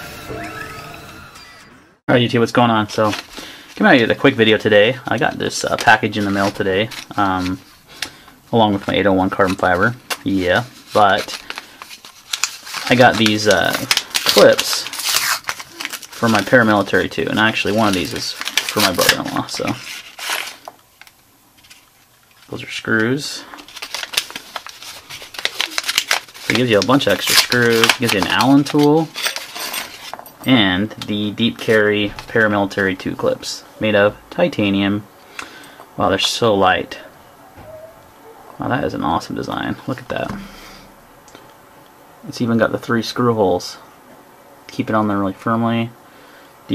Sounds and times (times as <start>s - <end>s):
Inside, small room: 0.0s - 46.7s
Speech: 2.1s - 3.2s, 3.8s - 7.6s, 8.5s - 11.3s, 12.8s - 14.9s, 16.2s - 19.8s, 22.5s - 23.6s, 26.5s - 29.2s, 30.4s - 35.1s, 36.0s - 37.2s, 38.6s - 40.5s, 42.2s - 43.9s, 44.7s - 46.0s.